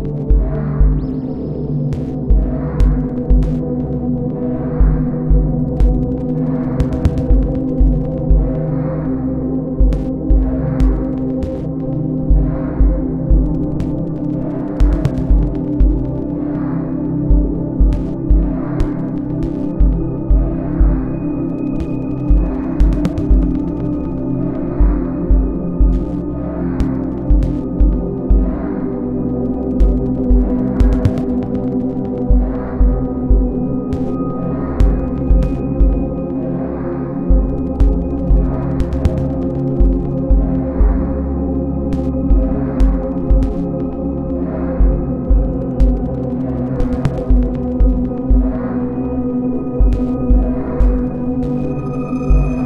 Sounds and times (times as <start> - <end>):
Ambient music: 0.0 - 52.6.